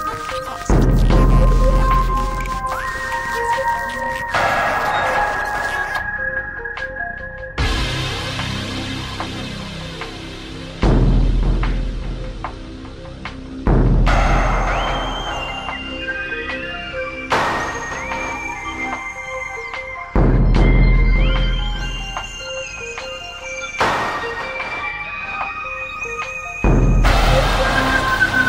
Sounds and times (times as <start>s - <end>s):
Scary music: 0.0s - 28.4s.